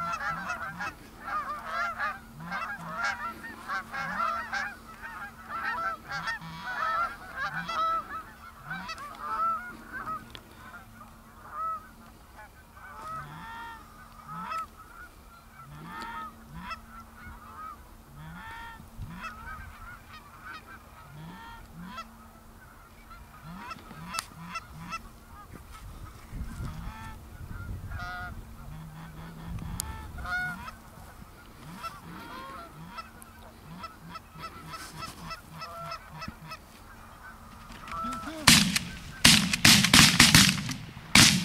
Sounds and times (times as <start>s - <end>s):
Honk: 0.0s - 41.4s.